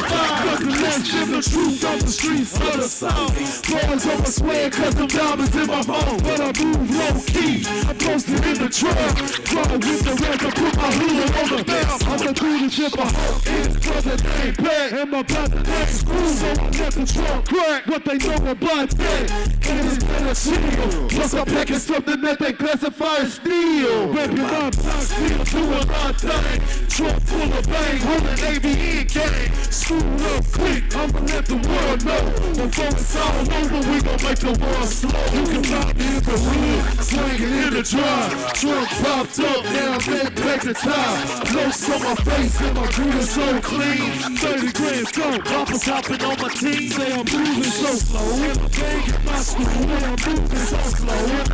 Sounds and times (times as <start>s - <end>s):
Pop music: 0.0s - 51.5s.